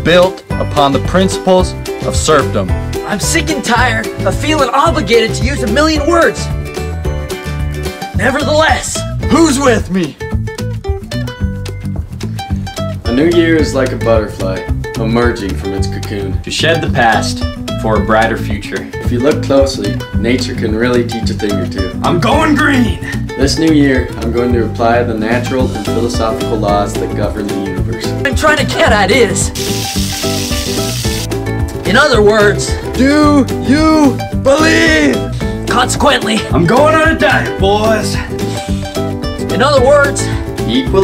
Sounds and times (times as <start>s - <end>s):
Speech: 0.0s - 6.5s, 8.2s - 10.2s, 13.1s - 29.5s, 31.9s - 38.3s, 39.5s - 41.0s
Music: 0.0s - 41.0s.